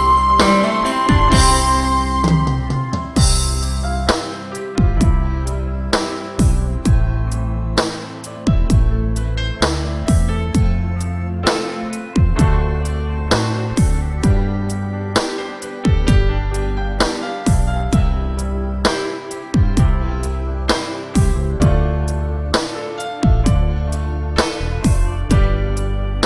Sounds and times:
Music: 0.0 - 26.2.

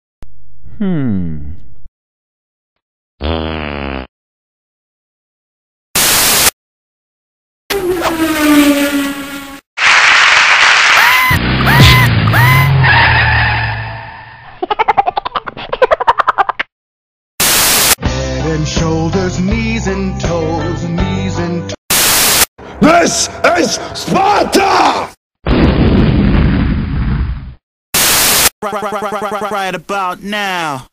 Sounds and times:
Music: 18.0 - 21.8.

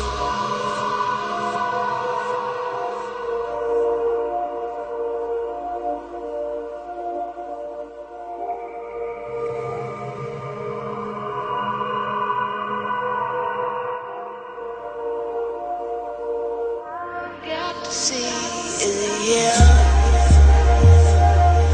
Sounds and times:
Electronic music: 0.0 - 13.8, 14.5 - 21.7.

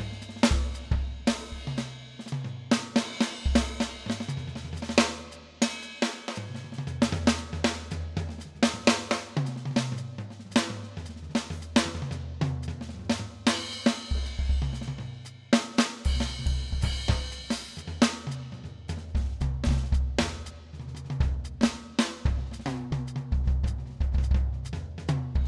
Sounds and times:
Bass drum: 0.0 - 5.3, 6.5 - 15.1, 16.1 - 25.4
Drum kit: 0.0 - 25.4
Drum roll: 0.0 - 25.4.

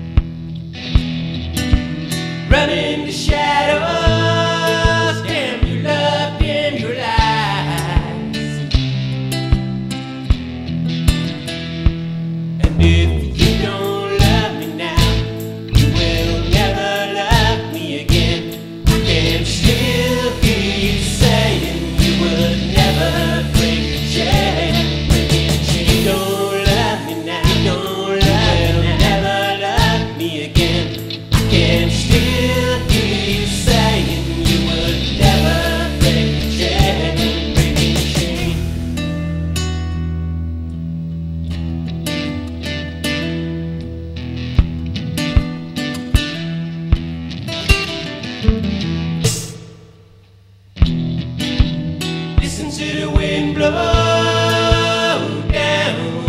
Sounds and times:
Steel guitar, slide guitar: 0.0 - 3.0, 18.4 - 29.4, 30.3 - 49.2
Singing: 2.5 - 8.4, 12.7 - 38.8, 52.4 - 56.2.

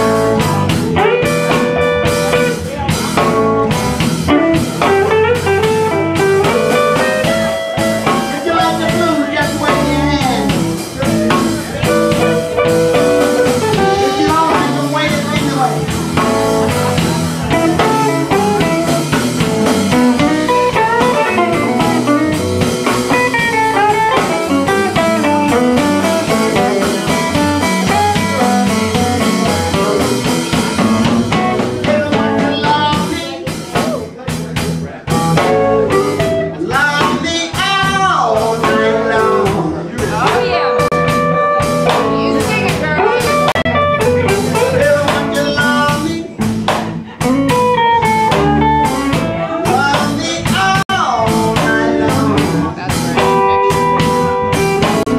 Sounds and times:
Blues: 0.0 - 55.1.

